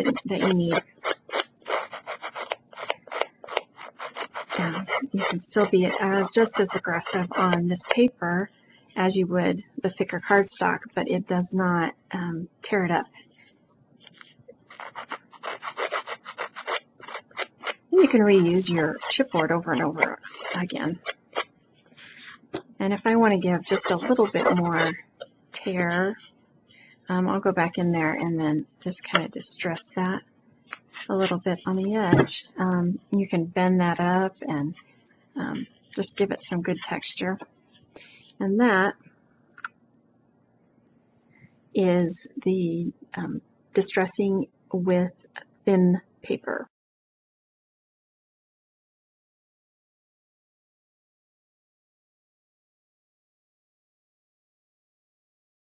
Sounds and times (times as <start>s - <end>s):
Speech: 0.0s - 0.8s, 4.5s - 13.2s, 17.9s - 21.1s, 22.1s - 26.2s, 27.1s - 30.2s, 31.0s - 34.8s, 35.4s - 37.4s, 38.4s - 39.0s, 41.8s - 46.7s
Scissors: 0.0s - 8.0s, 14.1s - 17.8s, 18.4s - 22.4s, 23.6s - 25.0s.